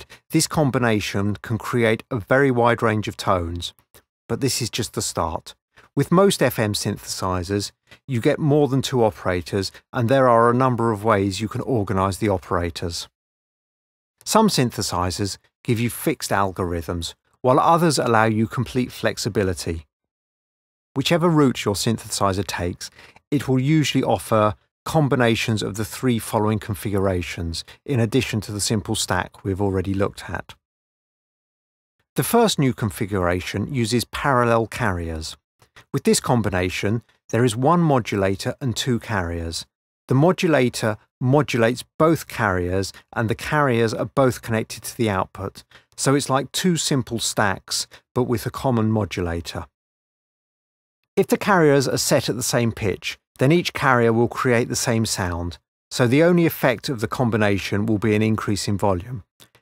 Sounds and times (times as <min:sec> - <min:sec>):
Speech: 0:00.0 - 0:13.1, 0:14.2 - 0:19.9, 0:21.0 - 0:30.6, 0:32.2 - 0:49.7, 0:51.2 - 0:59.3.